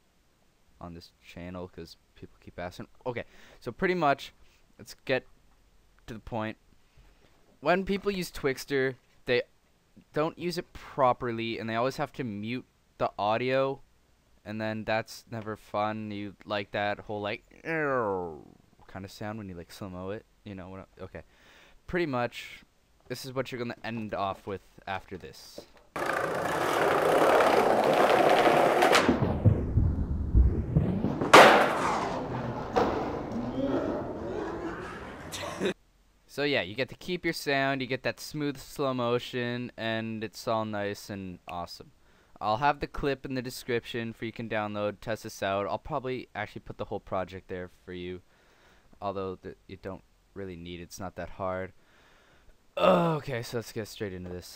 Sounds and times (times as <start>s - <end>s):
Speech: 0.8s - 5.3s, 6.0s - 6.6s, 7.6s - 13.8s, 14.4s - 21.3s, 21.9s - 25.7s, 33.4s - 48.2s, 49.0s - 51.8s, 52.8s - 54.5s.